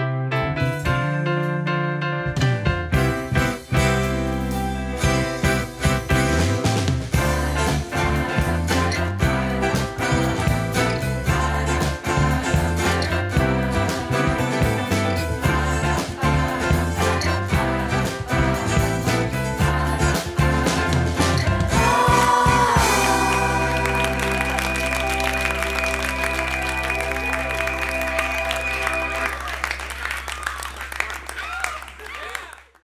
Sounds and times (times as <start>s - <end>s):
Music: 0.0s - 32.0s.